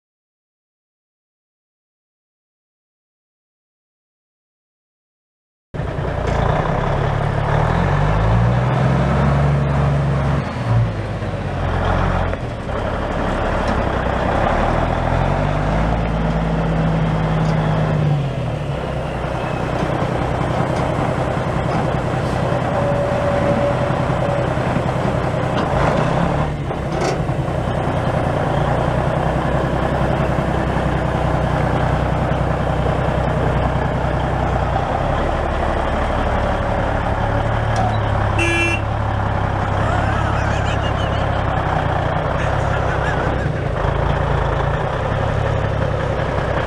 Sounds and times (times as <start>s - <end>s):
Vehicle: 5.8s - 46.6s.